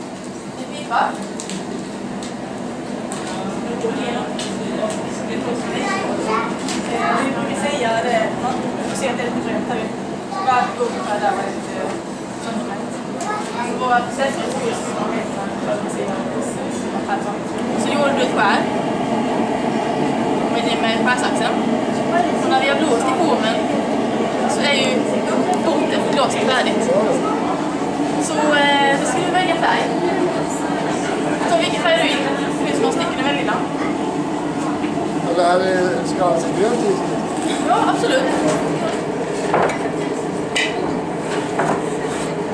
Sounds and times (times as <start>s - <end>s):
Speech: 3.3s - 18.7s.